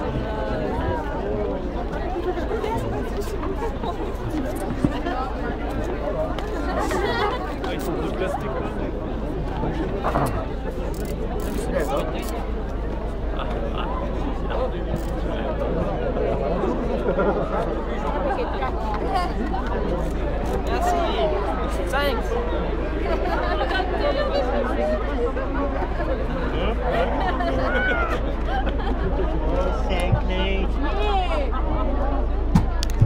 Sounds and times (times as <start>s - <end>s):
Speech: 0.0s - 33.0s.